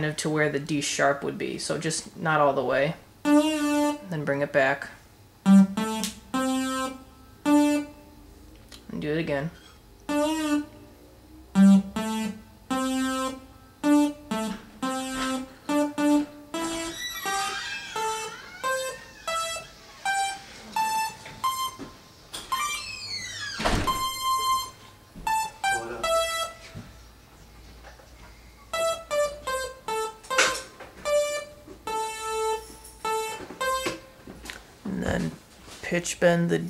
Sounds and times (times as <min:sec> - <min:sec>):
Electric piano: 0:05.4 - 0:08.1, 0:10.0 - 0:23.0, 0:23.8 - 0:27.6, 0:28.3 - 0:34.2.